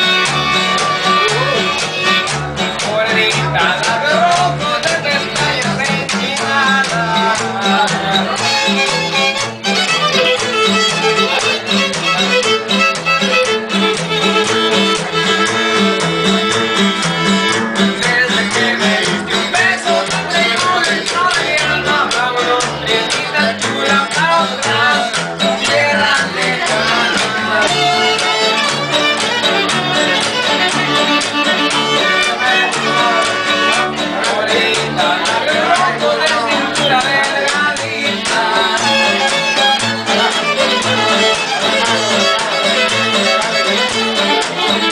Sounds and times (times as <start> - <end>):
Violin, fiddle: 0.0 - 2.4, 8.2 - 18.0, 26.8 - 34.0, 38.7 - 44.9.